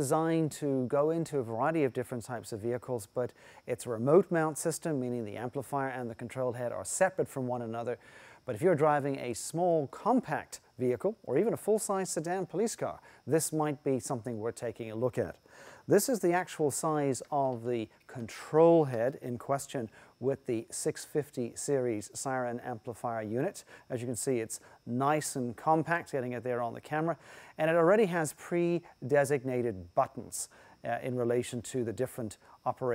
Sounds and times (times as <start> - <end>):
Speech: 0.0 - 32.9.